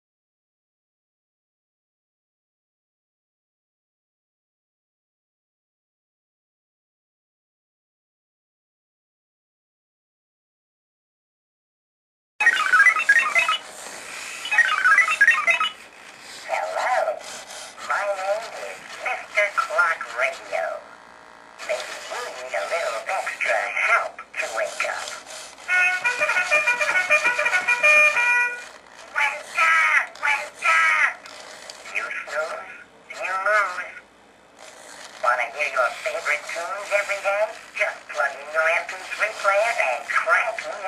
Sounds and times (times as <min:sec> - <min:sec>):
Speech: 0:16.4 - 0:21.0, 0:21.6 - 0:25.2, 0:29.1 - 0:31.2, 0:31.8 - 0:34.0, 0:35.2 - 0:40.8
Music: 0:25.7 - 0:28.8.